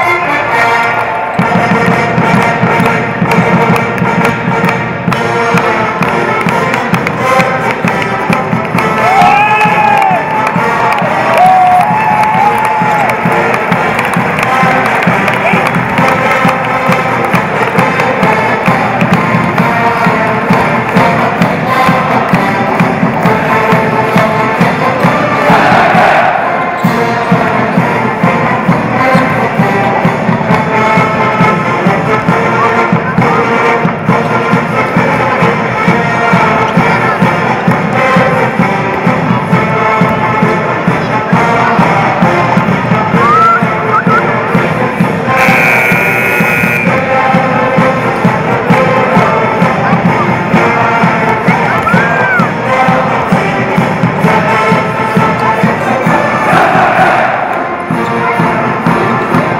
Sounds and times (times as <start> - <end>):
Music: 0.0 - 59.5
Cheering: 8.8 - 16.6, 25.3 - 27.2, 43.2 - 44.2, 45.4 - 47.0, 51.5 - 52.6, 56.0 - 58.4.